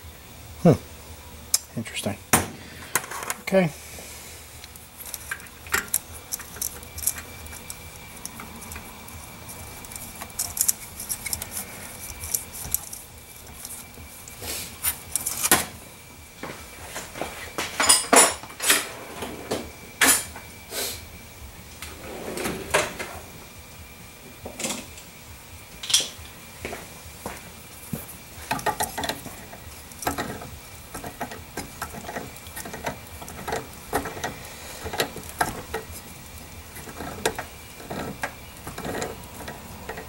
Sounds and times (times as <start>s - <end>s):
Drawer open or close: 18.6s - 20.3s, 21.8s - 23.3s.